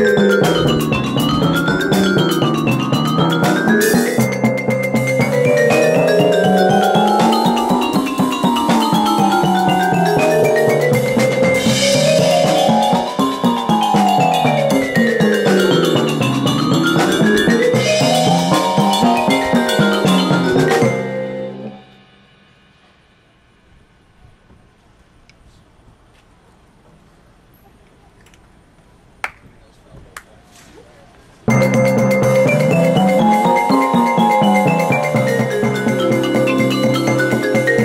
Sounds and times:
Timpani: 0:00.0 - 0:24.2, 0:31.5 - 0:37.8
Speech: 0:29.4 - 0:31.3.

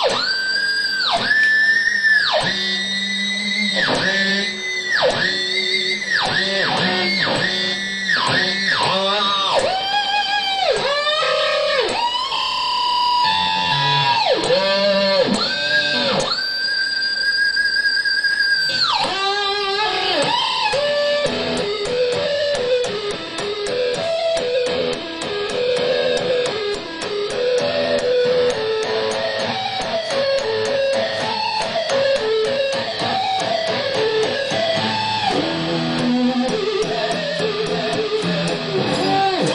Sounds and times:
Music: 0:00.0 - 0:39.5.

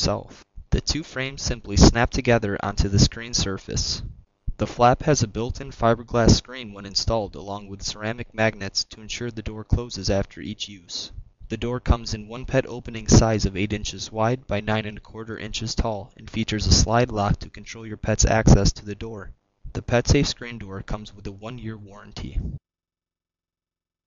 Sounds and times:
Speech: 0:00.0 - 0:22.6.

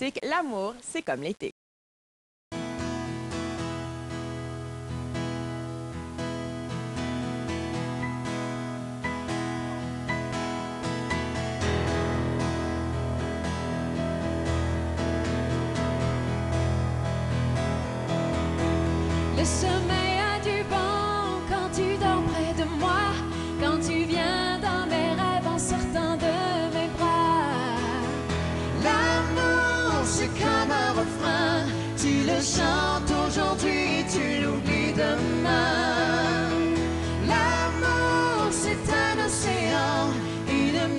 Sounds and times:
Music: 0:02.5 - 0:40.9.

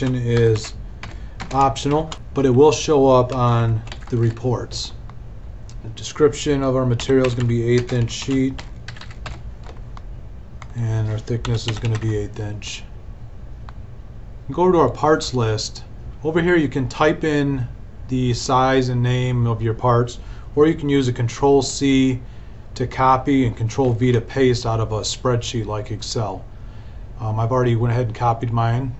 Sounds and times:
Speech: 0:00.0 - 0:00.8, 0:01.5 - 0:05.0, 0:05.8 - 0:08.6, 0:10.7 - 0:12.9, 0:14.5 - 0:22.2, 0:22.8 - 0:26.5, 0:27.2 - 0:28.9.

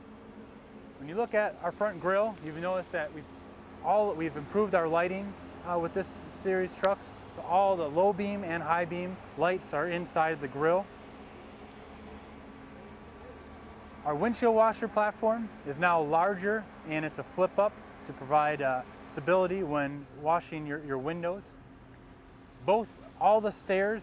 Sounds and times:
Speech: 0:01.0 - 0:10.9, 0:14.0 - 0:21.5, 0:22.6 - 0:24.0.

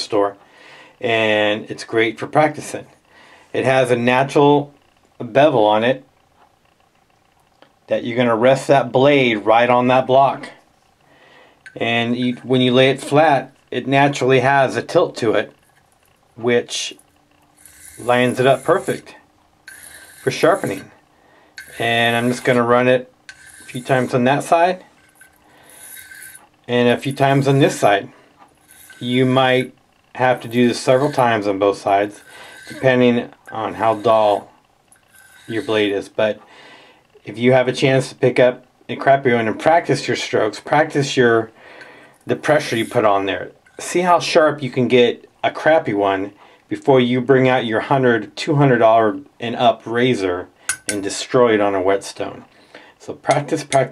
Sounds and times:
Speech: 0:00.0 - 0:00.4, 0:01.0 - 0:06.1, 0:07.9 - 0:10.6, 0:11.7 - 0:15.6, 0:16.4 - 0:17.0, 0:18.0 - 0:19.2, 0:20.2 - 0:21.0, 0:21.8 - 0:23.1, 0:23.7 - 0:24.9, 0:26.7 - 0:28.1, 0:29.0 - 0:34.5, 0:35.5 - 0:36.4, 0:37.2 - 0:41.6, 0:42.3 - 0:53.9
Inside, small room: 0:00.0 - 0:53.9.

